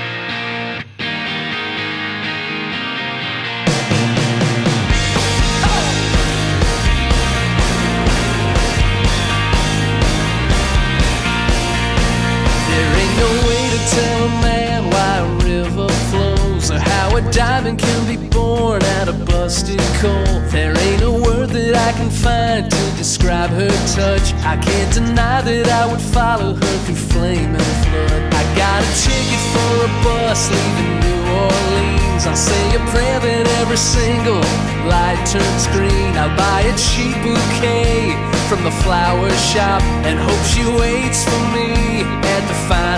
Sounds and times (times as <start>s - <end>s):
Music: 0.0s - 42.9s.